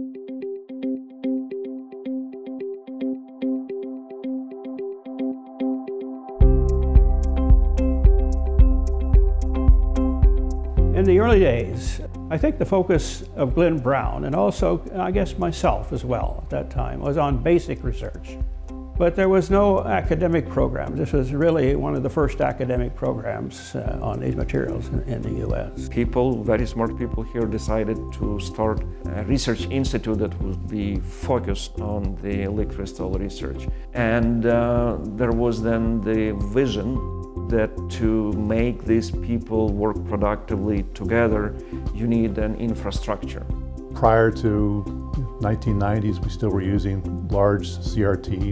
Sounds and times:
Music: 0.0 - 48.5
Speech: 11.0 - 18.3, 19.0 - 48.5.

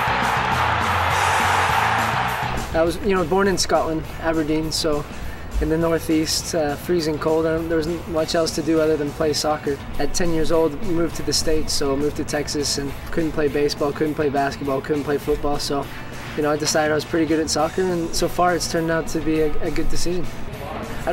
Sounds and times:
Music: 0.0 - 21.1
Speech: 2.7 - 21.1.

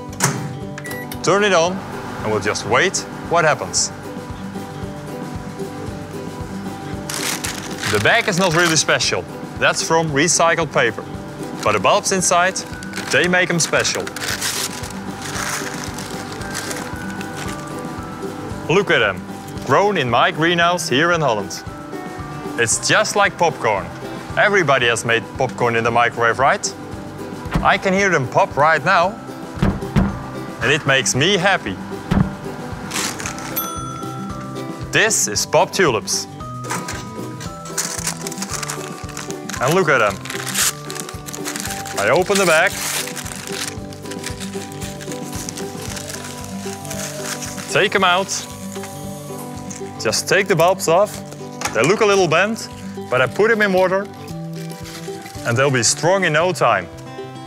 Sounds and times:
Music: 0.0 - 57.4
Speech: 1.2 - 3.9, 7.9 - 11.0, 11.6 - 14.1, 18.7 - 21.6, 22.6 - 26.7, 27.6 - 29.2, 30.6 - 31.8, 34.9 - 36.3, 39.6 - 40.2, 42.0 - 42.7, 47.7 - 48.5, 50.0 - 54.1, 55.4 - 56.9.

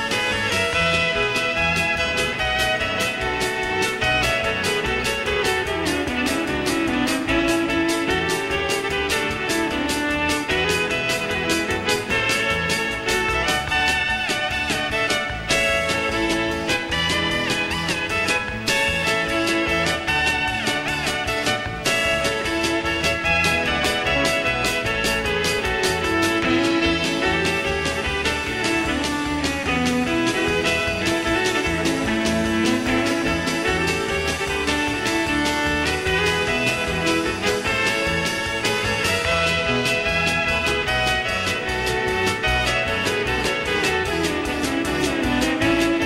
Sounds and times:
Violin, fiddle: 0.0 - 46.0.

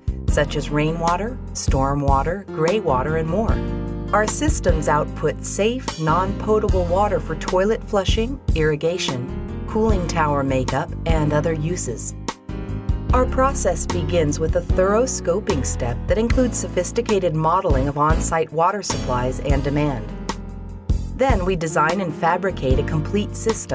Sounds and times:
Music: 0.0 - 23.7
Speech: 0.3 - 3.6, 4.2 - 12.1, 13.2 - 20.1, 21.2 - 23.7.

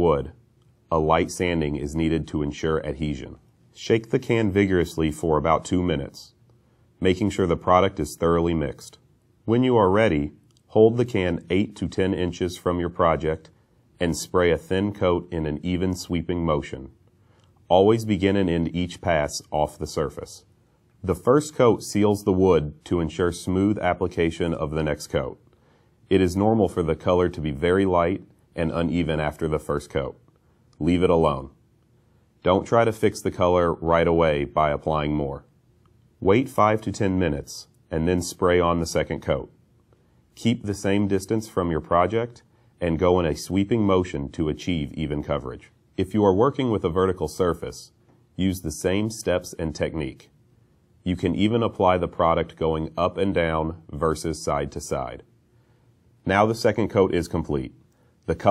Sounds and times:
Speech: 0.0 - 6.4, 7.0 - 17.0, 17.6 - 31.6, 32.4 - 35.6, 36.2 - 39.6, 40.3 - 50.4, 51.0 - 55.3, 56.2 - 58.5.

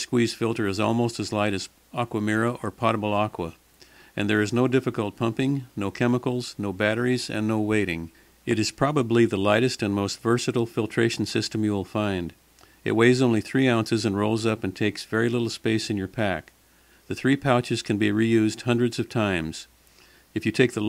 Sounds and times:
Speech: 0.0 - 3.6, 4.2 - 16.5, 17.1 - 19.7, 20.4 - 20.8.

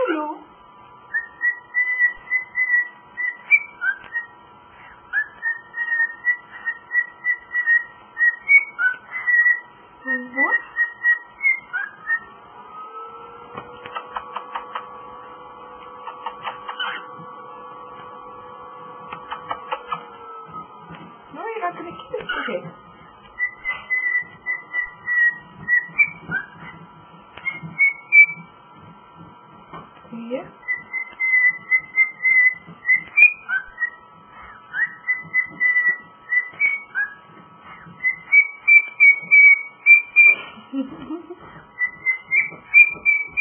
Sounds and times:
Speech: 0.0 - 0.5, 10.0 - 10.7, 21.3 - 22.8, 30.1 - 30.6.

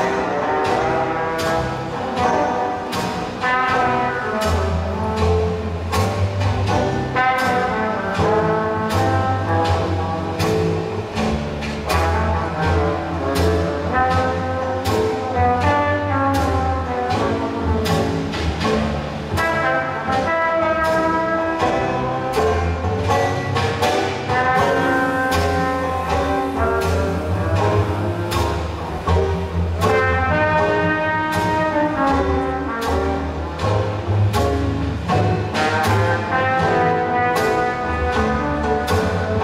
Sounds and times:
Music: 0.0 - 39.4.

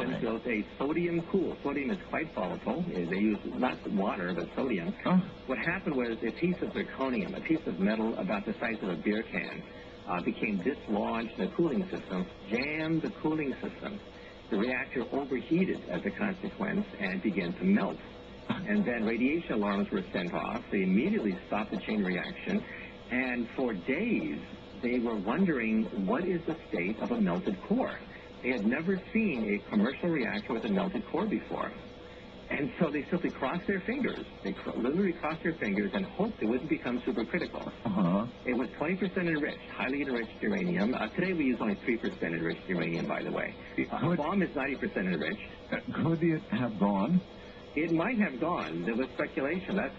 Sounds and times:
Speech: 0.0 - 31.9, 32.5 - 49.9.

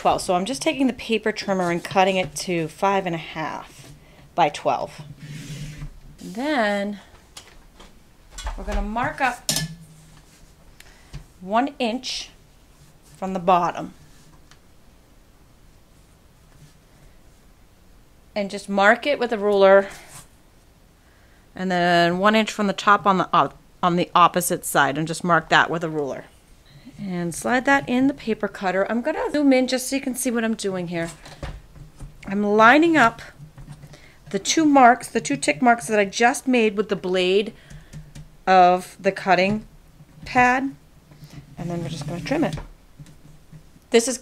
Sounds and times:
Speech: 0.0 - 3.7, 4.4 - 5.0, 6.2 - 7.0, 8.6 - 9.5, 11.4 - 12.4, 13.2 - 13.9, 18.4 - 20.0, 21.6 - 26.3, 27.0 - 31.2, 32.2 - 33.3, 34.3 - 37.5, 38.5 - 40.8, 41.6 - 42.6, 43.9 - 44.2.

